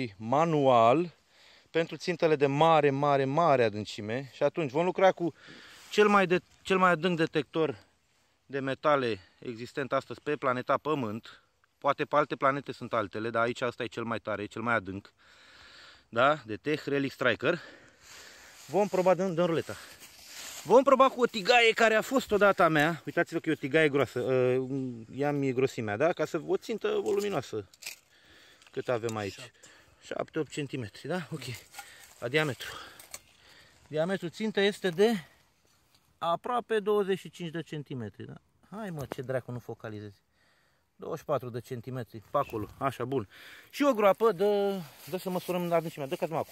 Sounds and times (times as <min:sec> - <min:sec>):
Speech: 0:00.0 - 0:07.9, 0:08.5 - 0:15.1, 0:16.1 - 0:17.7, 0:18.7 - 0:20.0, 0:20.6 - 0:27.7, 0:28.7 - 0:33.0, 0:33.9 - 0:35.4, 0:36.2 - 0:40.2, 0:41.0 - 0:46.5.